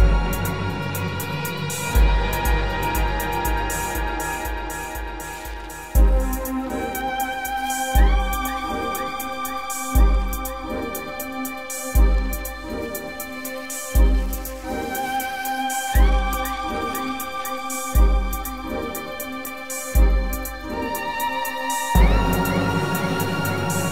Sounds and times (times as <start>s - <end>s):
Music: 0.0s - 23.9s.